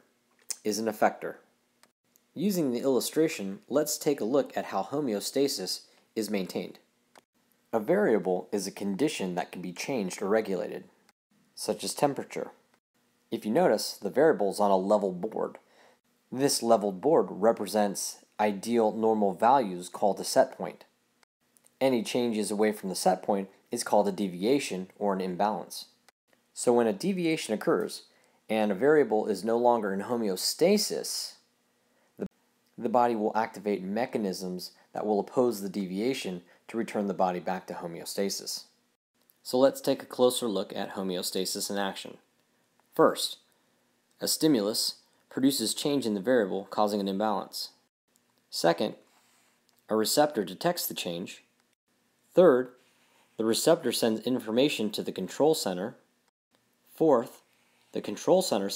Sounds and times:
Speech: 0:00.0 - 0:01.5, 0:02.4 - 0:06.9, 0:07.7 - 0:11.0, 0:11.6 - 0:12.6, 0:13.3 - 0:15.7, 0:16.3 - 0:20.9, 0:21.8 - 0:26.0, 0:26.6 - 0:31.5, 0:32.2 - 0:38.8, 0:39.4 - 0:42.3, 0:42.9 - 0:43.5, 0:44.2 - 0:47.9, 0:48.5 - 0:49.1, 0:49.9 - 0:51.5, 0:52.3 - 0:52.8, 0:53.4 - 0:56.1, 0:56.9 - 0:58.7.

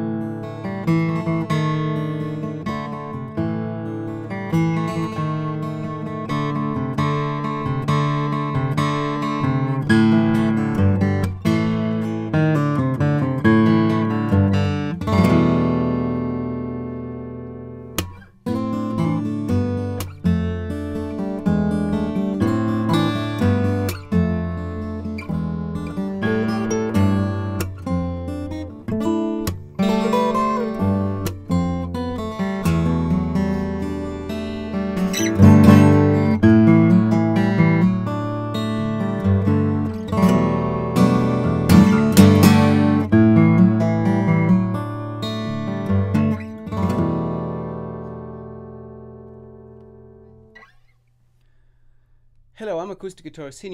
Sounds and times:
Acoustic guitar: 0:00.0 - 0:53.7
Strum: 0:00.0 - 0:53.7.

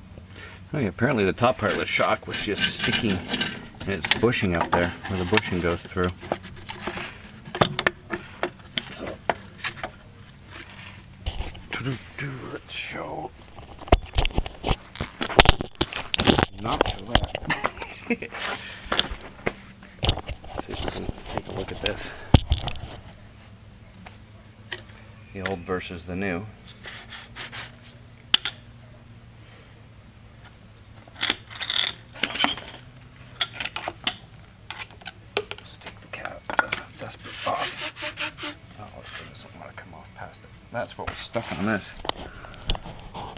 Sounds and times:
Speech: 0:00.7 - 0:06.2, 0:11.7 - 0:13.3, 0:25.3 - 0:26.5, 0:38.8 - 0:42.0.

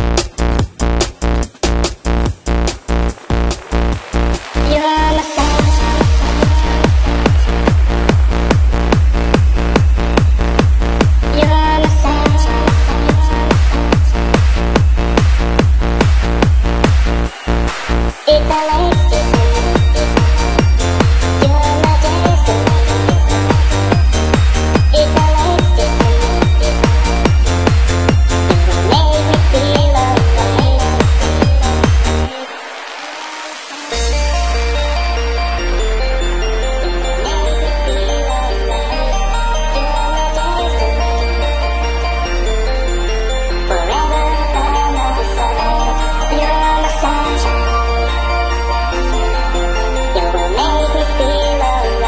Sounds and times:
Techno: 0:00.0 - 0:52.0.

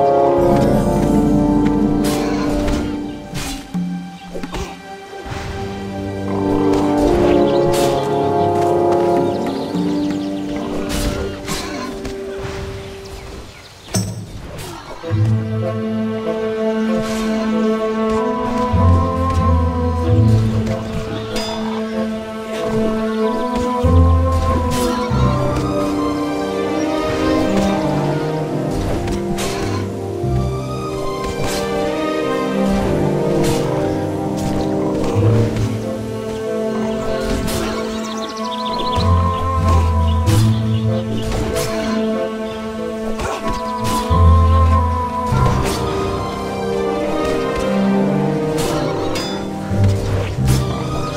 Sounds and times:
Soundtrack music: 0:00.0 - 0:13.1, 0:15.0 - 0:51.1.

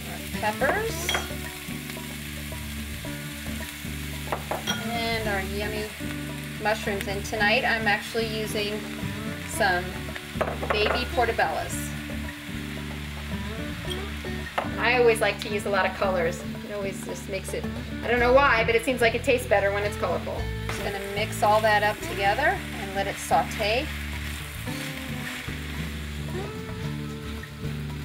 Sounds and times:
Speech: 0:00.0 - 0:01.1, 0:04.8 - 0:05.9, 0:06.6 - 0:08.8, 0:09.5 - 0:09.9, 0:10.8 - 0:11.9, 0:14.8 - 0:23.9
Music: 0:00.0 - 0:28.0.

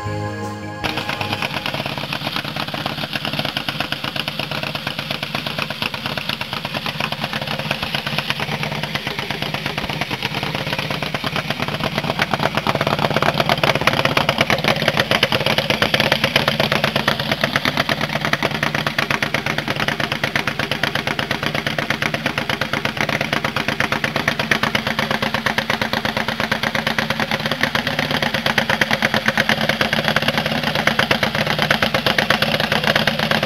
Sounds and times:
Motorcycle: 0:00.0 - 0:33.4
Engine knocking: 0:01.0 - 0:33.4.

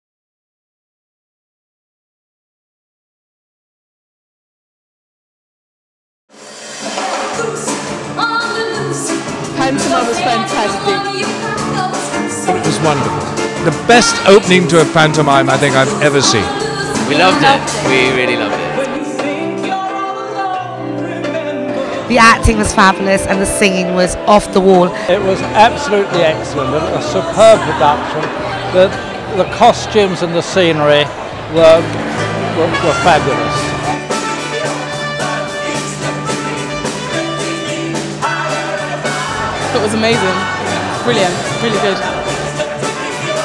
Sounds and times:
Music: 0:06.3 - 0:43.4.

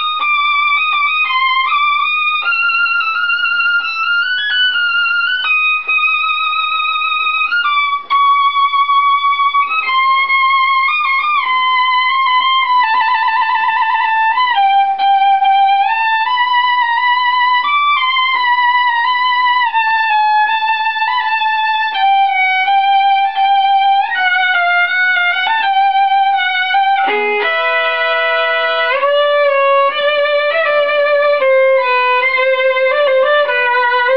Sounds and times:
Violin, fiddle: 0:00.0 - 0:34.1.

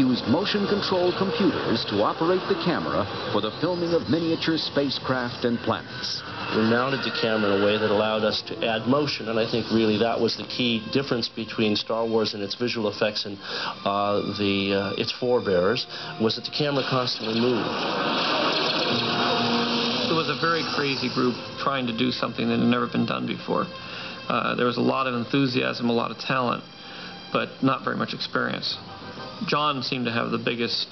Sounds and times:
Speech: 0:00.0 - 0:17.7, 0:20.1 - 0:26.6, 0:27.3 - 0:28.8, 0:29.4 - 0:30.9
Music: 0:00.0 - 0:30.9.

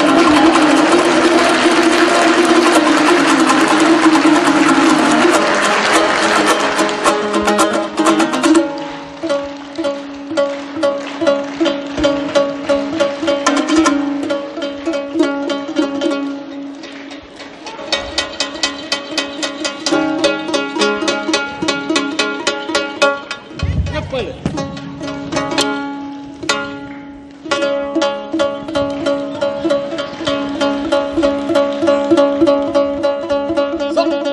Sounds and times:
Bowed string instrument: 0:00.0 - 0:34.3
Inside, large room or hall: 0:00.0 - 0:34.3.

